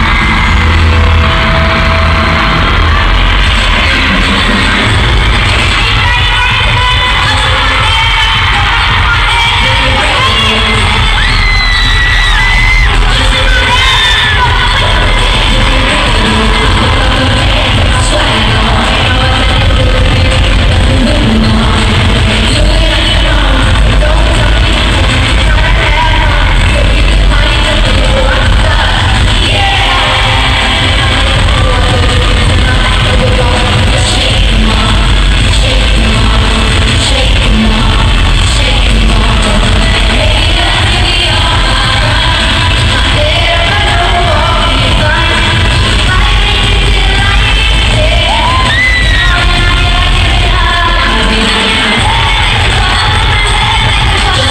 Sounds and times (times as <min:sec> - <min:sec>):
Music: 0:00.0 - 0:54.5.